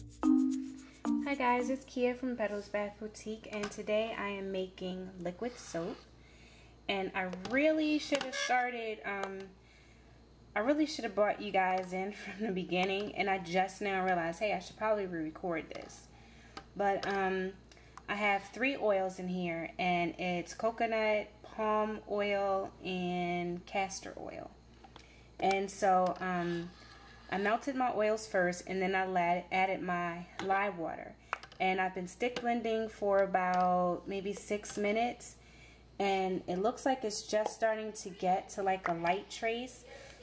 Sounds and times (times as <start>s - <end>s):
Speech: 1.2s - 6.1s, 6.9s - 9.5s, 10.6s - 16.1s, 16.8s - 24.6s, 25.4s - 35.4s, 36.0s - 40.2s.